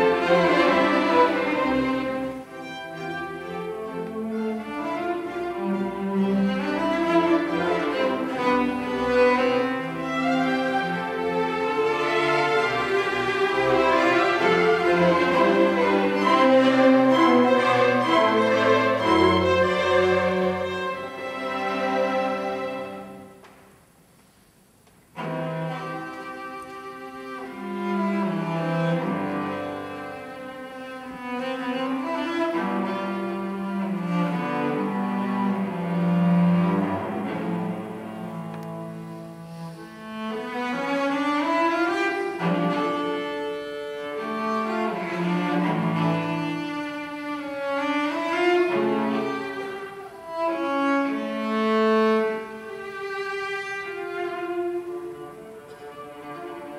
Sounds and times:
Violin, fiddle: 0:00.0 - 0:23.4, 0:25.1 - 0:56.7
Cello: 0:00.0 - 0:56.7
Orchestra: 0:00.0 - 0:56.7.

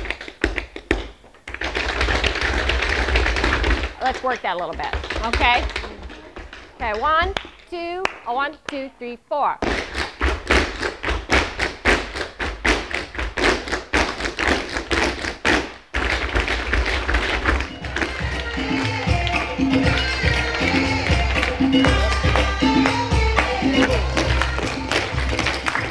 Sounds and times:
Music: 0:17.1 - 0:25.9.

